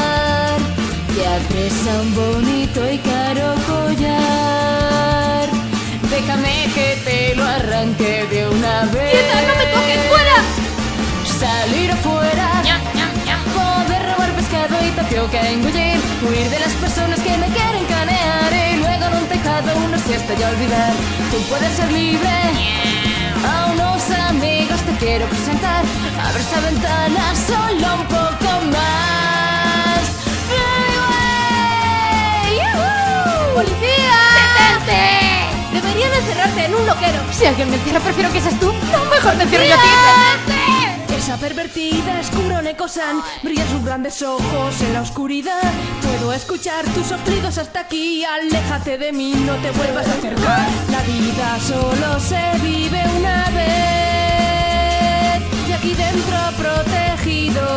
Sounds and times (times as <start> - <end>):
Music: 0.0 - 57.7.